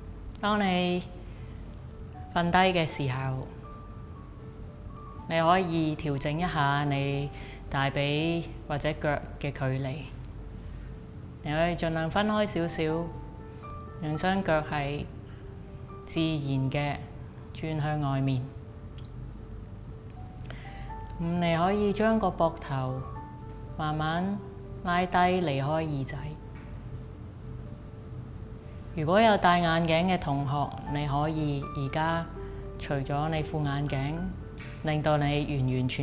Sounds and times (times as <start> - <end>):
Music: 0.0 - 36.0
Speech: 0.4 - 1.1, 5.3 - 10.1, 11.5 - 13.1, 29.0 - 36.0.